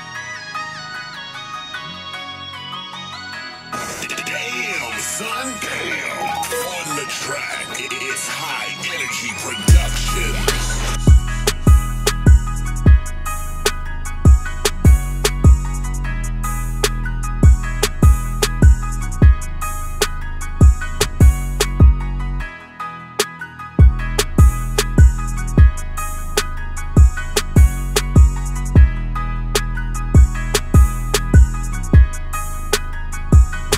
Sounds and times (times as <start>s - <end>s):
Music: 0.0s - 33.7s.